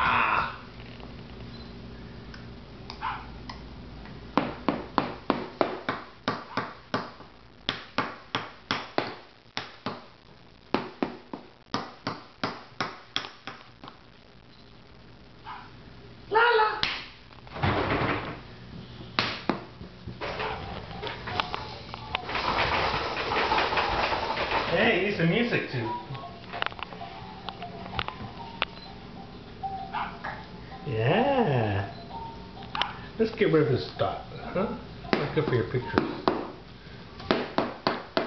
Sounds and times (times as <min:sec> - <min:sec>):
Speech: 0:24.7 - 0:26.1
Music: 0:25.5 - 0:33.1.